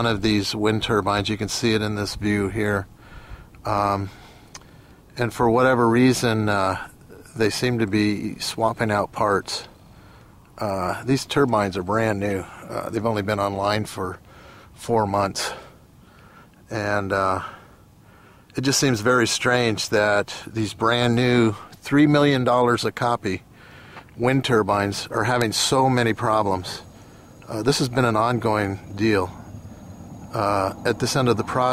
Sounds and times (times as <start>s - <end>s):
Speech: 0.0s - 2.9s, 3.6s - 4.2s, 5.2s - 9.7s, 10.6s - 14.2s, 14.8s - 15.7s, 16.7s - 17.6s, 18.5s - 23.4s, 24.2s - 29.4s, 30.3s - 31.7s.